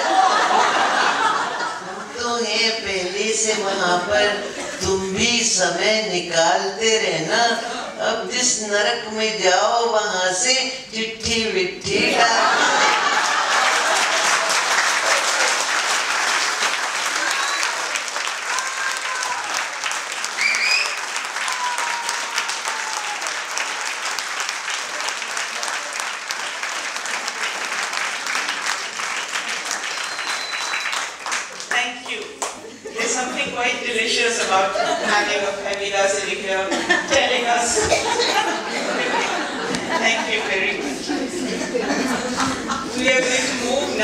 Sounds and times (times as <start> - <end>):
Speech: 2.1 - 12.6, 33.0 - 38.1, 38.7 - 41.4, 42.8 - 44.0.